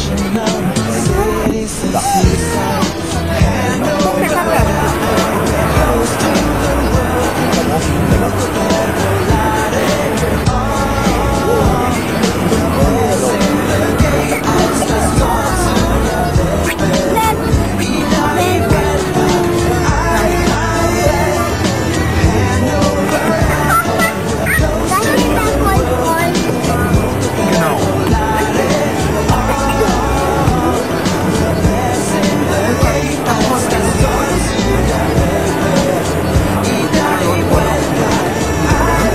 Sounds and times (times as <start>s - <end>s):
Music: 0.0s - 39.1s
Speech: 0.0s - 39.1s.